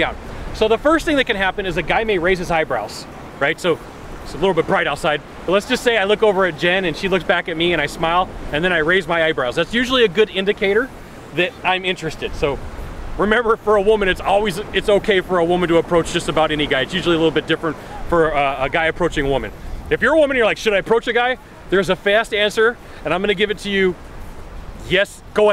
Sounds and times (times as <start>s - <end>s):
Speech: 0.0s - 12.6s, 13.2s - 24.0s, 24.8s - 25.5s.